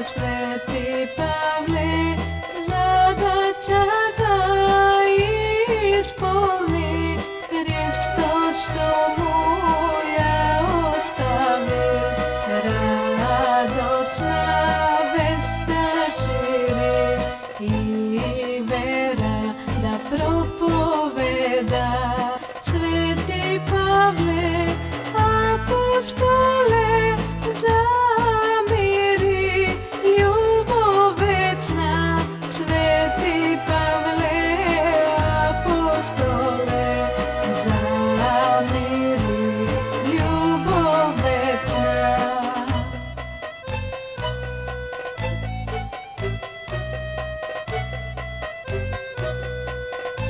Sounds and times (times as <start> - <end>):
Rhythm and blues: 0.0 - 50.2.